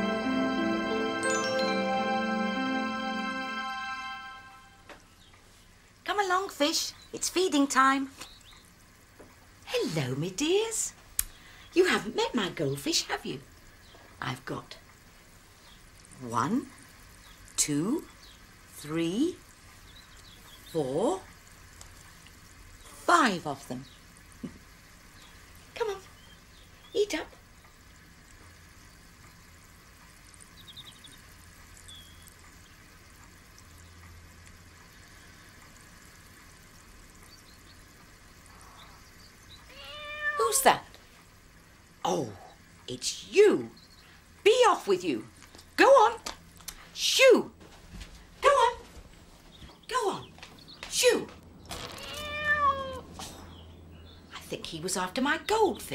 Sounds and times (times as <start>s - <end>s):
Speech: 6.1s - 8.2s, 9.7s - 11.0s, 11.8s - 13.4s, 14.2s - 14.8s, 16.2s - 16.7s, 17.6s - 18.1s, 18.8s - 19.4s, 20.7s - 21.3s, 22.9s - 23.9s, 25.8s - 26.1s, 26.9s - 27.4s, 40.4s - 41.0s, 42.0s - 43.8s, 44.4s - 46.3s, 47.0s - 47.6s, 48.4s - 48.9s, 49.9s - 51.4s, 54.3s - 55.9s.